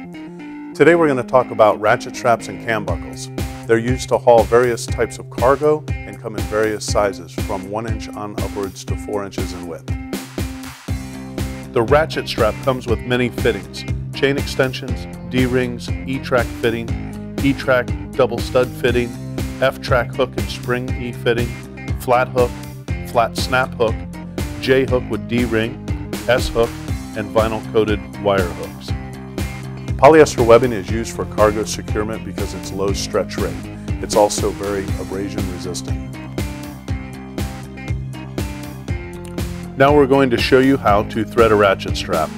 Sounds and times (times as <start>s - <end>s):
Music: 0.0s - 42.3s
Speech: 0.8s - 9.8s, 11.8s - 22.5s, 23.1s - 24.0s, 24.6s - 28.9s, 30.0s - 36.0s, 39.8s - 42.3s.